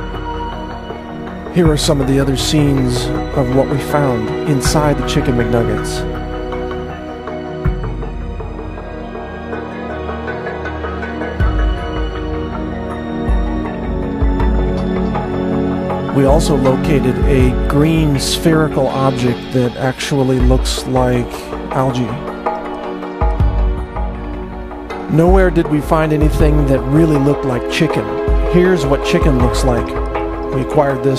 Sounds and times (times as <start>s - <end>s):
Music: 0.0s - 31.1s
Speech: 1.6s - 6.1s, 16.1s - 22.3s, 25.1s - 31.1s.